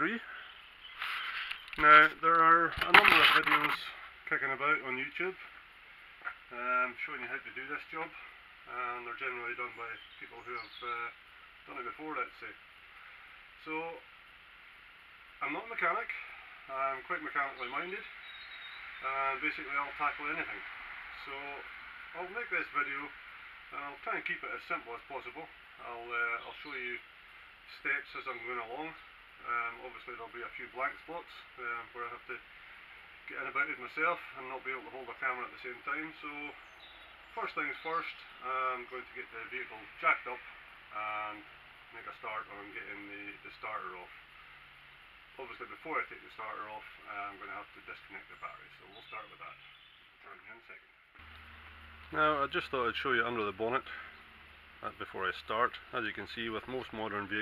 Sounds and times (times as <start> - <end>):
Speech: 0.0 - 0.3, 1.8 - 5.5, 6.5 - 12.6, 13.6 - 14.1, 15.4 - 18.1, 19.0 - 20.6, 21.2 - 27.0, 27.7 - 32.4, 33.3 - 36.6, 37.4 - 44.2, 45.4 - 49.6, 50.2 - 50.9, 52.1 - 54.1, 54.8 - 57.4.